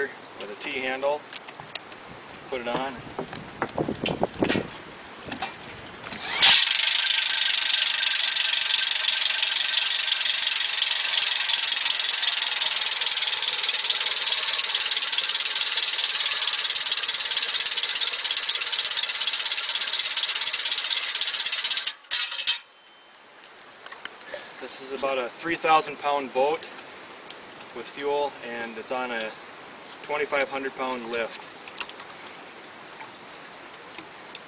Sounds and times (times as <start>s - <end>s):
Speech: 0.0s - 1.2s, 2.5s - 3.0s, 24.6s - 26.7s, 27.8s - 29.4s, 30.0s - 31.4s.